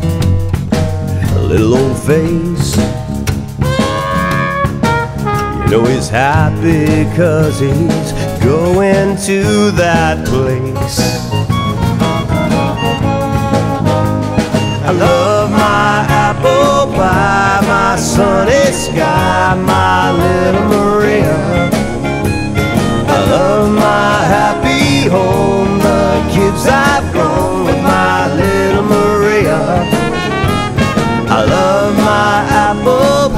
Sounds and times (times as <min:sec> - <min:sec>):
Music: 0:00.0 - 0:33.3.